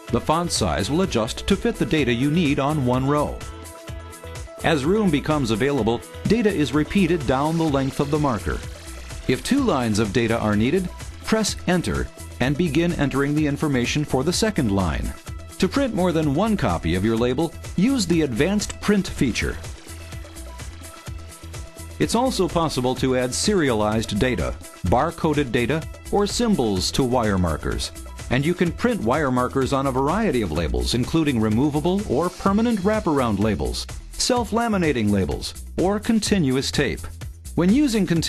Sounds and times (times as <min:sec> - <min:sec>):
Music: 0:00.0 - 0:38.2
Speech: 0:00.1 - 0:03.4, 0:04.6 - 0:08.6, 0:09.3 - 0:19.6, 0:22.0 - 0:38.2.